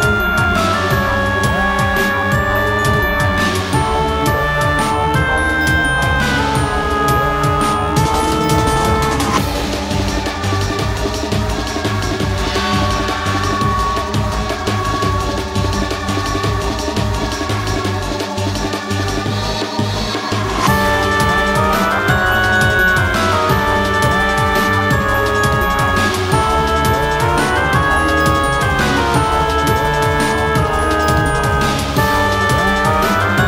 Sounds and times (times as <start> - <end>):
Scary music: 0.0 - 33.4.